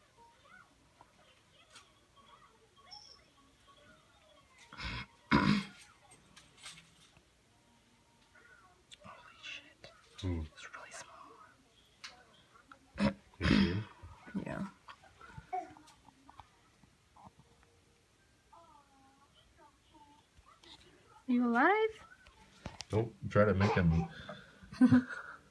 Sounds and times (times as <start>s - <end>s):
Inside, small room: 0.0s - 25.5s.